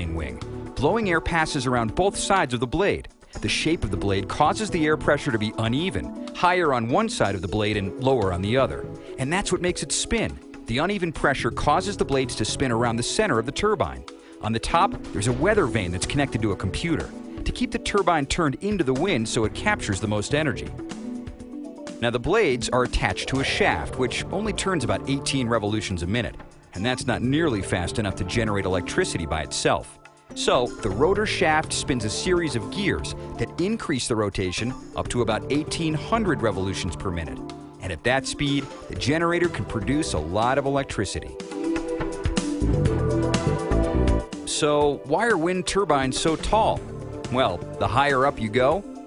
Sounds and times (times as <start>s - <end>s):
Speech: 0.0s - 20.7s, 22.0s - 41.4s, 44.5s - 48.8s
Music: 0.0s - 49.0s.